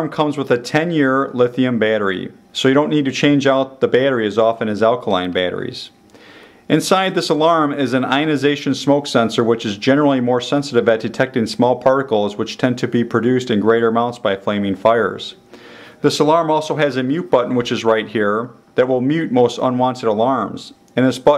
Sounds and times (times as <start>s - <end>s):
Speech: 0.0s - 6.0s, 6.7s - 15.4s, 16.0s - 21.3s.